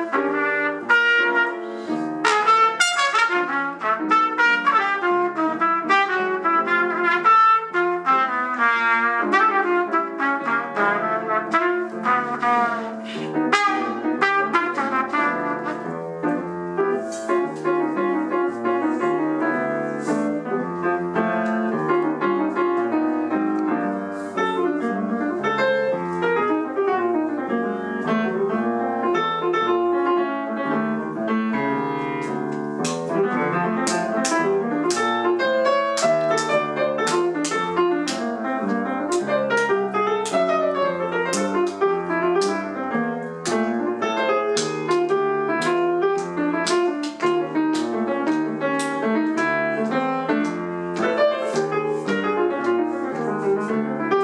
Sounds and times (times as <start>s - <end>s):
Piano: 0.0s - 54.2s.